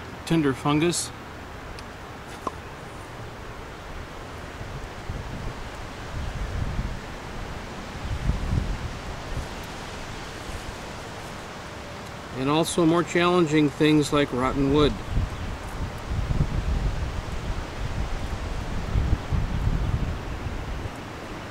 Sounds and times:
Waves, surf: 1.1 - 21.5.

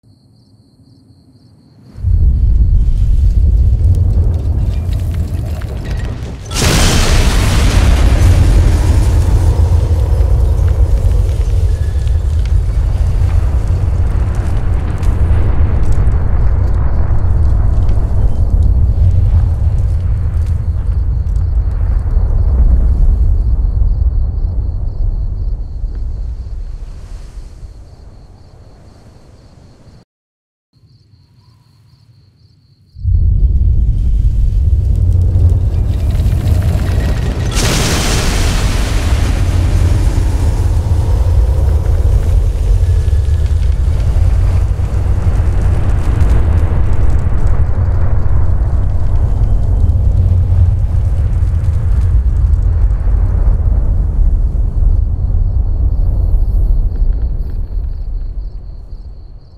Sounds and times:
Burst, pop: 4.6 - 15.2, 35.6 - 53.2.

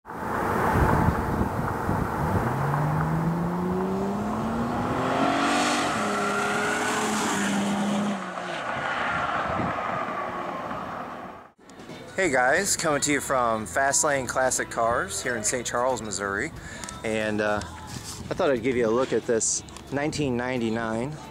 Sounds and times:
Car: 0.0 - 11.6.

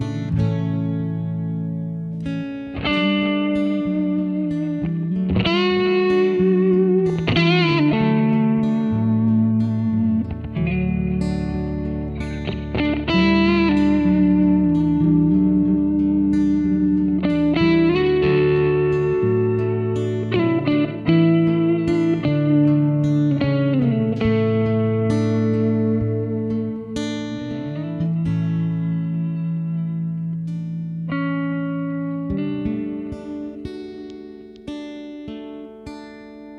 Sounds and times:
Electric guitar: 0.0 - 36.5.

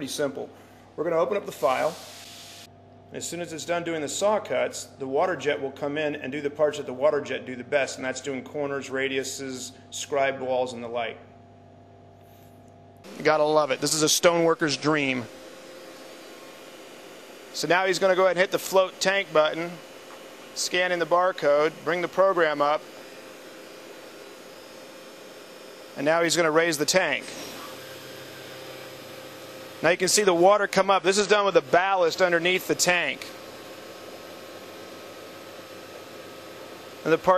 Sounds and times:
Speech: 0.0 - 2.0, 3.1 - 11.3, 13.1 - 15.3, 17.6 - 19.8, 20.6 - 22.8, 26.0 - 27.3, 29.8 - 33.3, 37.0 - 37.3.

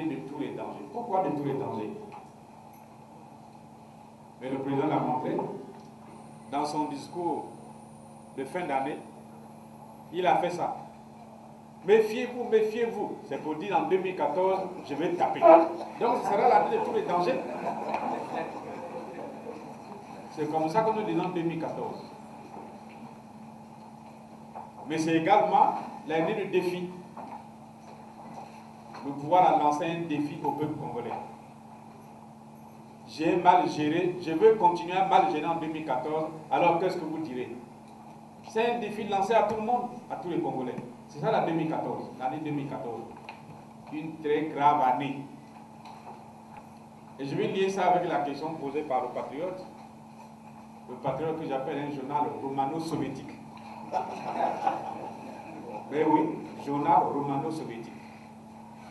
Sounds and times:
Speech: 0.0 - 2.2, 4.4 - 5.7, 6.5 - 7.6, 8.4 - 9.1, 10.1 - 10.9, 11.8 - 17.6, 20.3 - 22.1, 24.8 - 27.1, 29.0 - 31.3, 33.1 - 37.6, 38.5 - 43.2, 43.9 - 45.4, 47.2 - 49.7, 50.9 - 53.4, 55.5 - 58.1.

